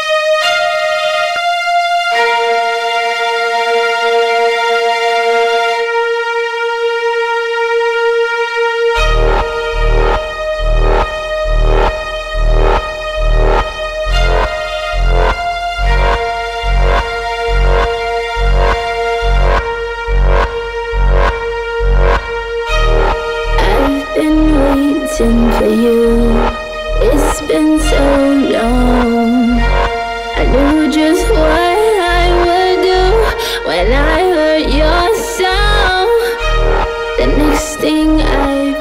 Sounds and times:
Electronic music: 0:00.0 - 0:38.8.

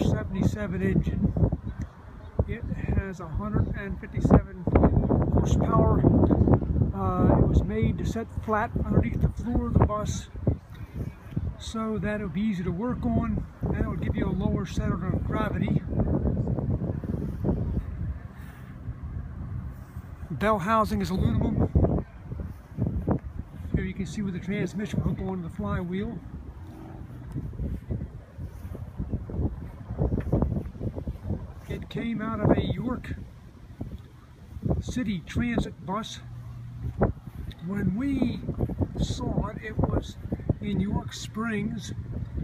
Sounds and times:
Speech: 0:00.0 - 0:01.2, 0:02.4 - 0:04.8, 0:07.0 - 0:10.4, 0:11.6 - 0:15.9, 0:20.3 - 0:21.8, 0:23.7 - 0:26.2, 0:31.7 - 0:33.2, 0:34.8 - 0:36.3, 0:37.6 - 0:42.0.

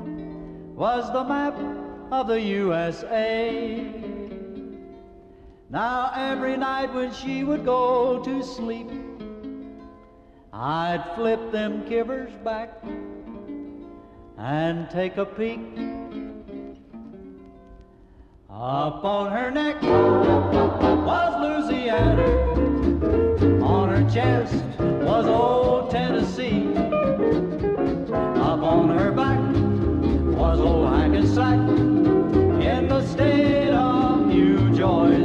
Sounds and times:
Swing music: 0:19.7 - 0:35.2
Singing: 0:23.6 - 0:26.8, 0:28.4 - 0:29.6, 0:32.6 - 0:35.2.

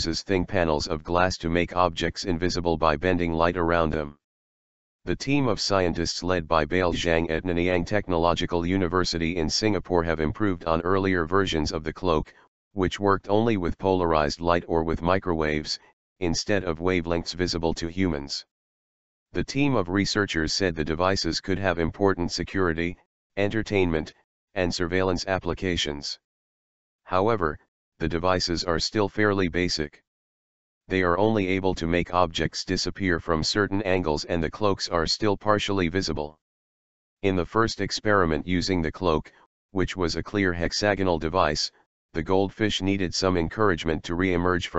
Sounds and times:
Speech: 0:00.0 - 0:04.2, 0:05.1 - 0:18.5, 0:19.4 - 0:26.2, 0:27.1 - 0:30.1, 0:30.9 - 0:36.4, 0:37.2 - 0:44.7.

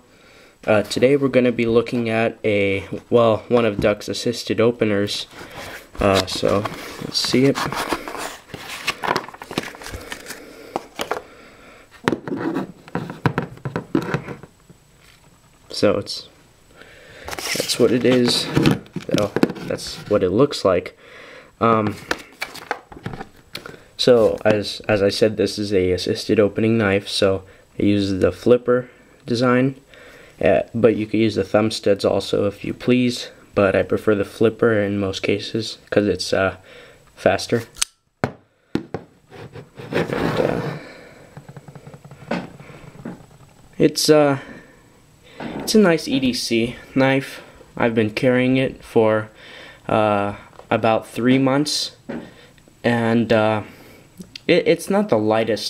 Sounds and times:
Speech: 0:00.6 - 0:05.3, 0:06.0 - 0:07.7, 0:15.7 - 0:16.4, 0:17.6 - 0:21.0, 0:21.6 - 0:22.0, 0:24.0 - 0:29.8, 0:30.4 - 0:36.6, 0:37.2 - 0:37.8, 0:43.8 - 0:44.5, 0:45.7 - 0:49.3, 0:49.9 - 0:52.0, 0:52.8 - 0:53.7, 0:54.3 - 0:55.6.

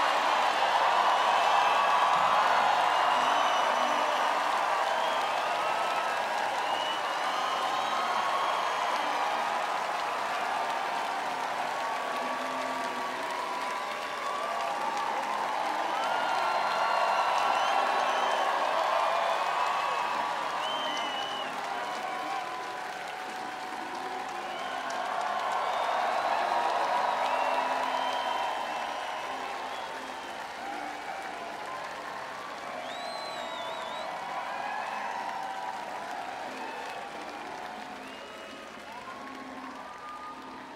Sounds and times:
Music: 0:00.0 - 0:40.7.

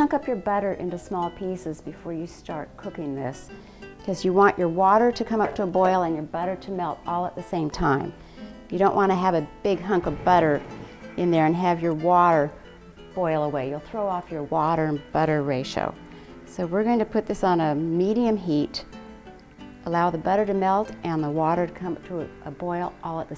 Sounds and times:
Speech: 0:00.0 - 0:03.5, 0:04.1 - 0:12.5, 0:13.2 - 0:18.8, 0:19.9 - 0:23.3
Music: 0:00.0 - 0:23.3.

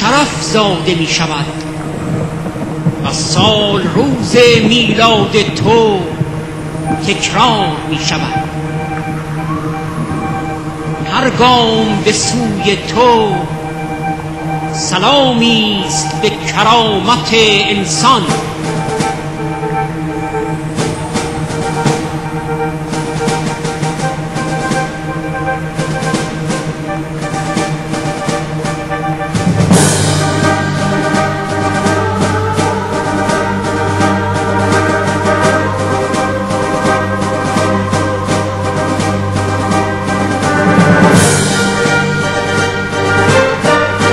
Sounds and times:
Speech: 0:00.0 - 0:01.6, 0:03.0 - 0:06.2, 0:07.0 - 0:08.5, 0:11.1 - 0:13.5, 0:14.8 - 0:18.5
Music: 0:00.0 - 0:44.1.

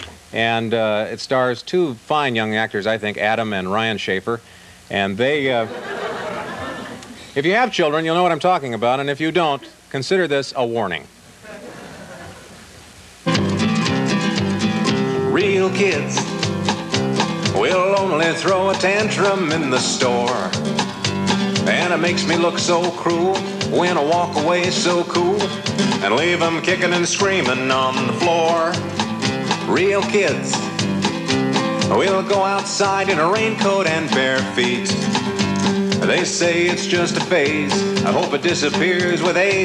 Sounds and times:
Funny music: 0:13.3 - 0:39.6.

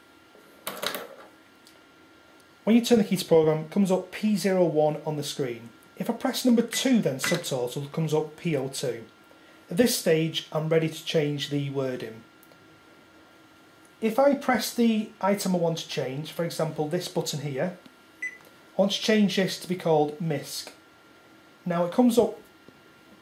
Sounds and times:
Speech: 0:02.6 - 0:12.3, 0:14.0 - 0:17.8, 0:18.8 - 0:20.8, 0:21.6 - 0:22.5.

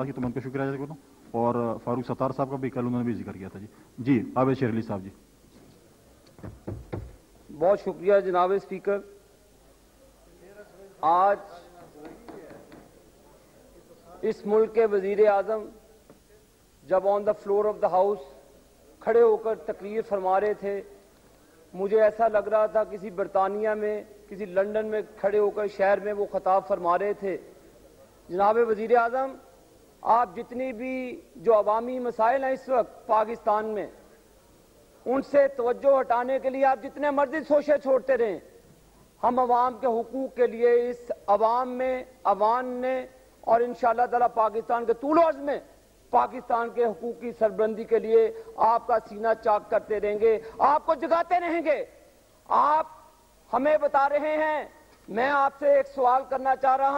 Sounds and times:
Male speech, man speaking: 0:00.0 - 0:05.2, 0:07.5 - 0:09.2, 0:10.1 - 0:21.0, 0:21.6 - 0:27.6, 0:28.3 - 0:34.0, 0:35.0 - 0:38.5, 0:39.2 - 0:56.9
Narration, monologue: 0:00.0 - 0:56.9.

